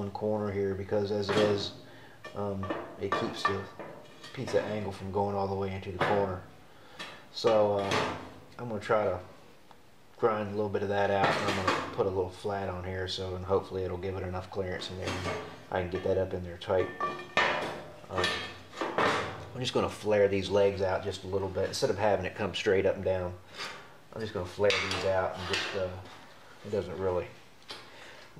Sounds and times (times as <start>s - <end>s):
Speech: 0.0s - 1.8s, 2.4s - 6.5s, 7.3s - 9.3s, 10.2s - 17.0s, 18.1s - 18.6s, 19.5s - 23.4s, 24.1s - 27.4s.